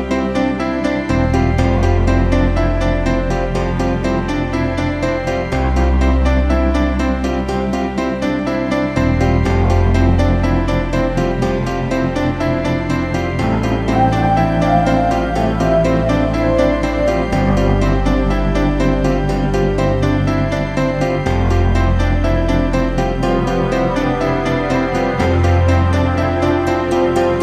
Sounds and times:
Background music: 0.0s - 27.4s.

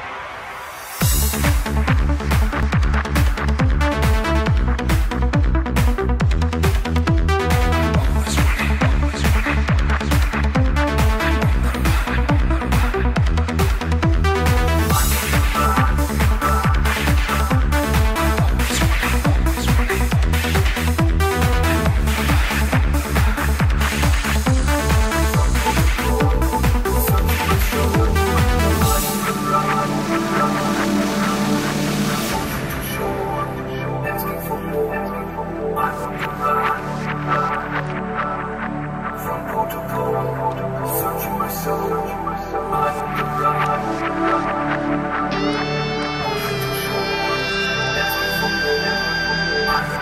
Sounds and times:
Music: 0.0s - 50.0s.

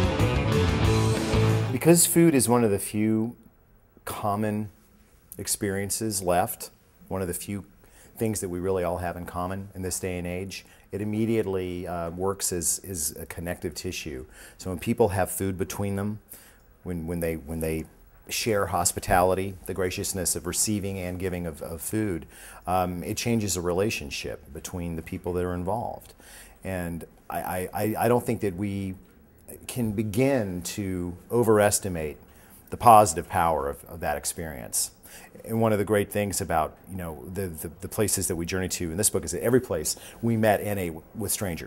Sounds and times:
Speech: 1.7s - 4.8s, 5.4s - 16.2s, 16.8s - 41.6s.

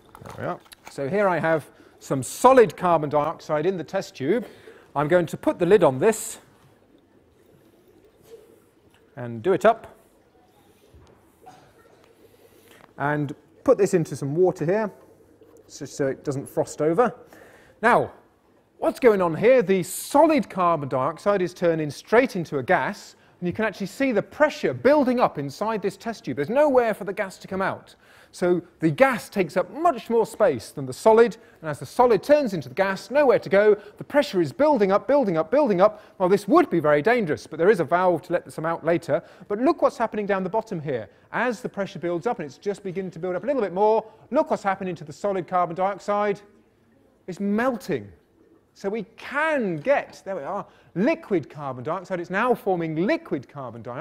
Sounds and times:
Speech: 0.3s - 6.5s, 9.2s - 10.0s, 13.0s - 15.0s, 15.7s - 17.2s, 17.8s - 18.2s, 18.8s - 46.5s, 47.3s - 48.2s, 48.8s - 54.0s.

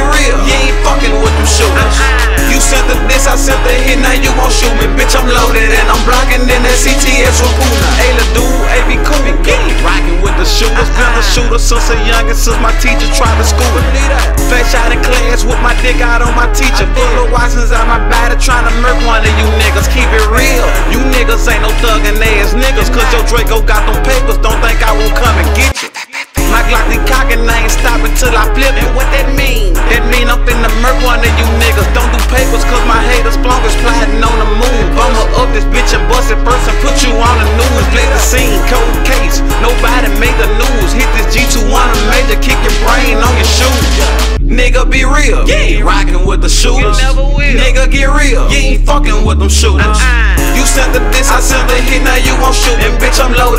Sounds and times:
Music: 0.0s - 53.5s.

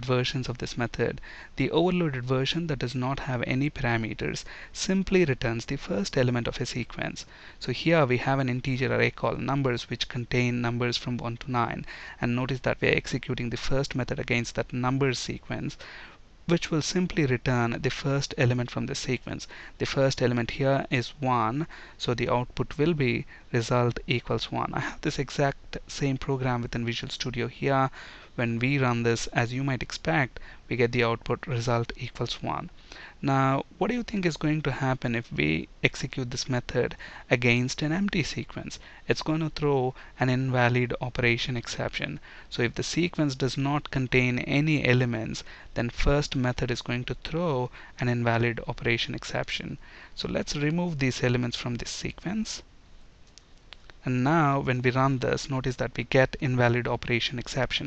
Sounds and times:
Speech: 0.0s - 15.8s, 16.5s - 52.7s, 54.0s - 57.8s.

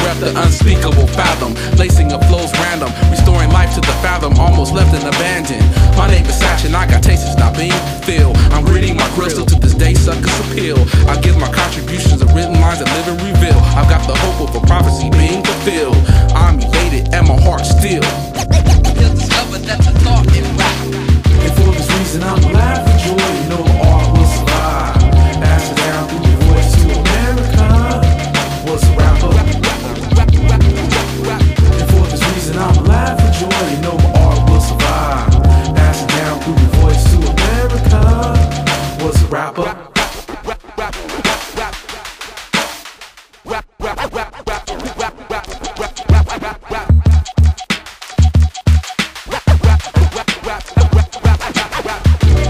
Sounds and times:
Rapping: 0.0s - 42.0s, 43.5s - 47.2s, 49.6s - 52.5s
Music: 0.0s - 52.5s.

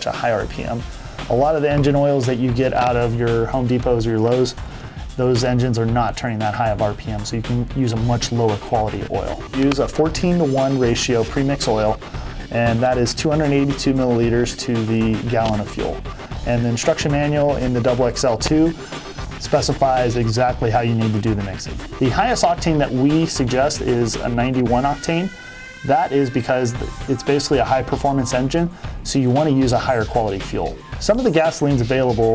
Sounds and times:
Speech: 0.0s - 4.6s, 5.2s - 18.8s, 19.4s - 25.3s, 25.9s - 32.3s
Music: 0.0s - 32.3s.

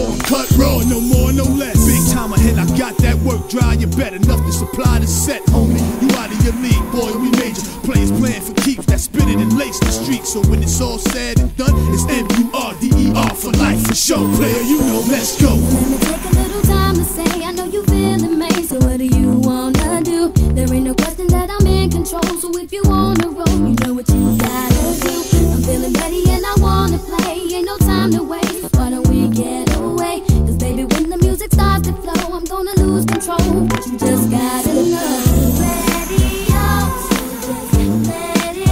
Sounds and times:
Music: 0.0s - 38.7s.

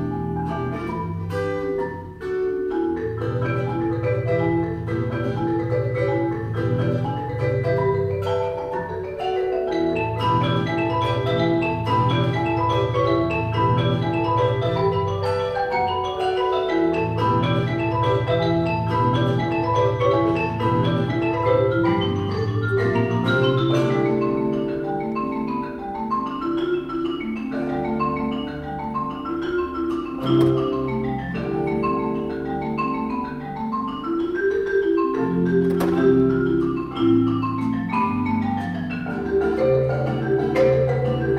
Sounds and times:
Percussion: 0.0s - 41.3s.

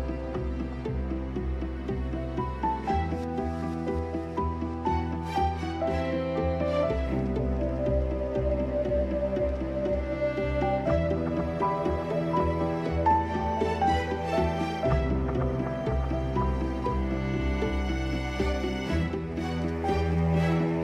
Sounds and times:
Music: 0.0s - 20.8s.

